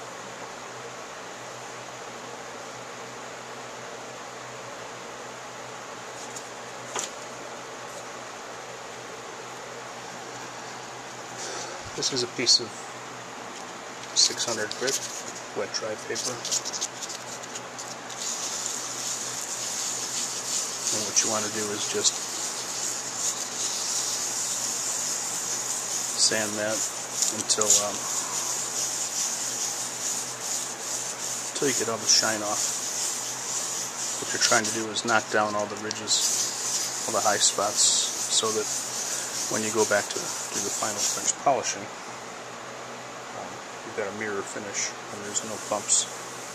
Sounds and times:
Speech: 12.0 - 12.8, 14.2 - 15.0, 15.6 - 16.6, 20.9 - 22.2, 26.2 - 28.1, 31.6 - 32.6, 34.2 - 36.4, 37.1 - 38.7, 39.5 - 41.9, 43.4 - 46.1.

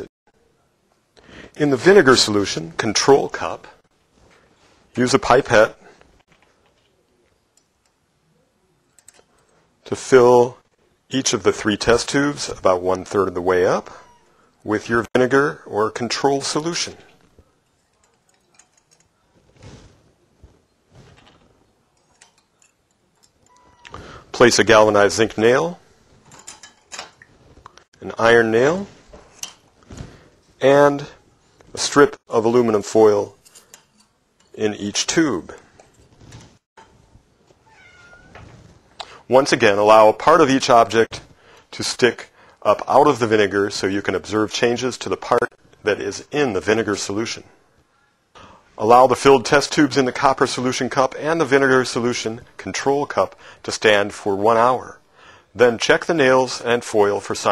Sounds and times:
Speech: 1.6 - 3.8, 5.0 - 6.0, 9.8 - 17.2, 24.3 - 25.8, 28.0 - 29.0, 30.6 - 33.4, 34.6 - 35.6, 39.2 - 47.6, 48.8 - 55.0, 55.6 - 57.5.

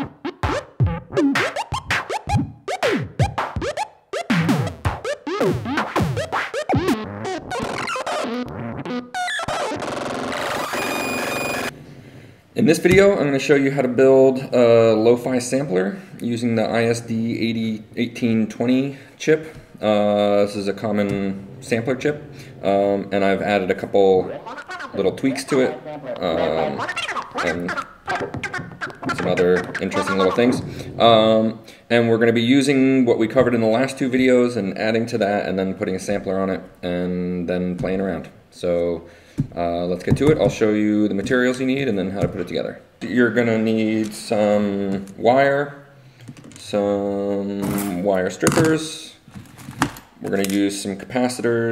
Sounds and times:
Sampler: 0.0 - 11.7, 24.0 - 30.7
Speech: 12.6 - 28.2, 29.0 - 45.8, 46.6 - 49.2, 50.2 - 51.7.

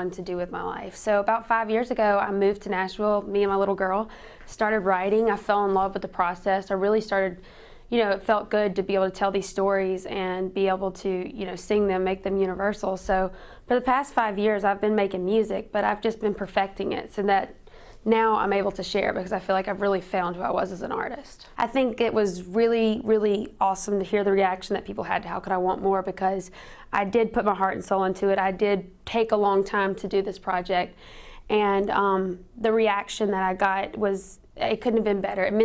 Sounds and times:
Speech: 0.0 - 35.6.

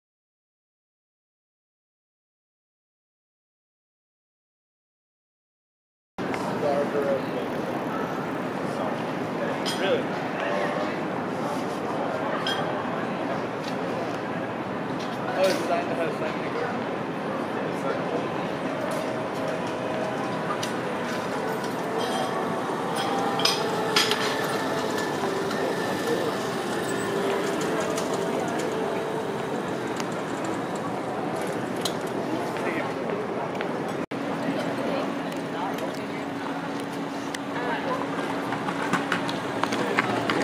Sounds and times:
Speech: 6.2 - 38.6, 39.6 - 40.4.

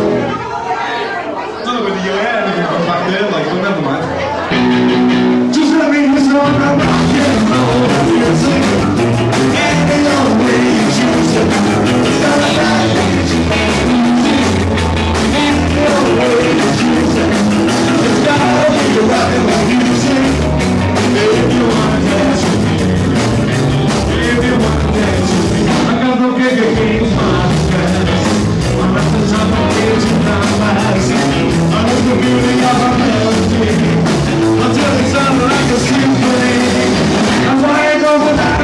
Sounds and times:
Music: 0.0 - 0.6, 4.4 - 38.6
Speech: 0.0 - 4.6.

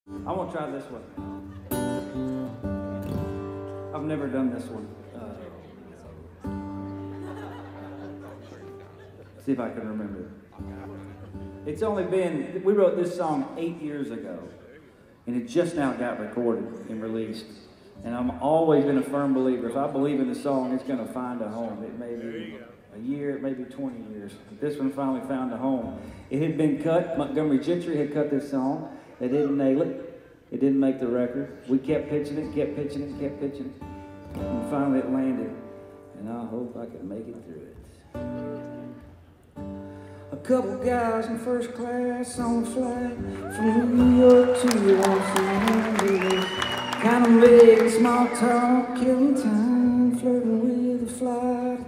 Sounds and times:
Music: 0.1 - 9.4, 10.0 - 12.1, 32.4 - 36.2, 38.1 - 51.8
Speech: 0.2 - 1.1, 4.0 - 6.3, 9.4 - 33.8, 34.5 - 35.6, 36.2 - 38.0.

